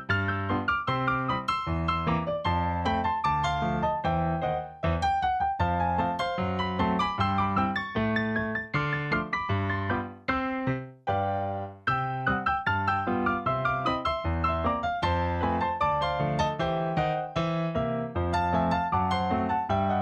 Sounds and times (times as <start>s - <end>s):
Music: 0.0s - 20.0s.